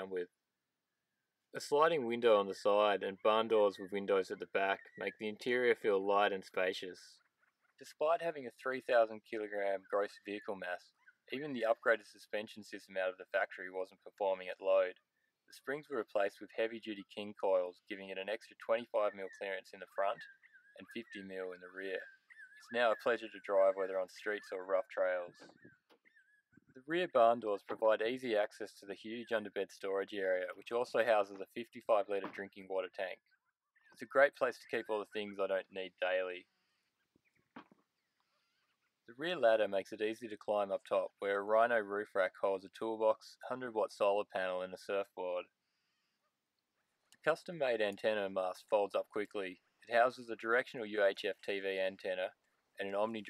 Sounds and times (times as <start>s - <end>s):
Speech: 0.0s - 0.3s, 1.6s - 7.2s, 7.8s - 25.5s, 26.8s - 33.2s, 34.0s - 36.4s, 39.1s - 45.5s, 47.2s - 53.2s.